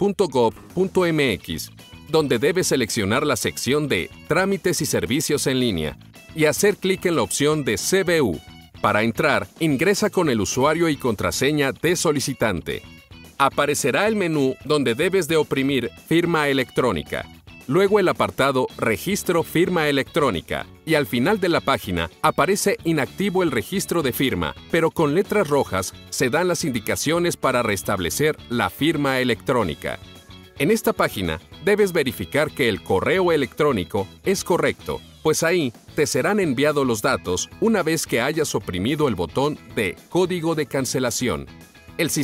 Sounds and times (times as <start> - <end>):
Speech: 0.0 - 30.0, 30.6 - 42.2
Music: 0.0 - 42.2.